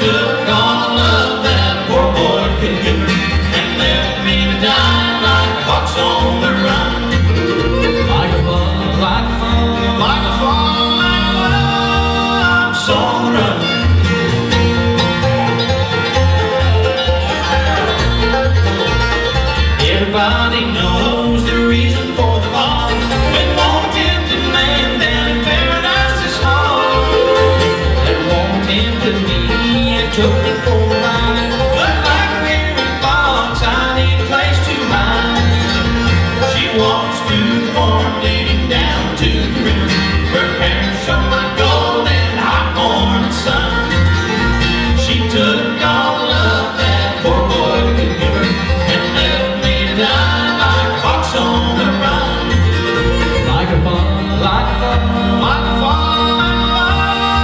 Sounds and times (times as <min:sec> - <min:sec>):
Music: 0:00.0 - 0:57.4.